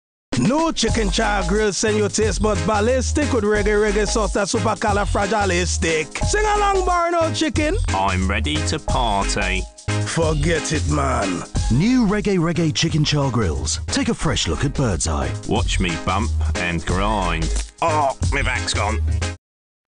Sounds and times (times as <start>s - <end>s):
Music: 0.3s - 19.4s
Speech: 0.4s - 19.0s.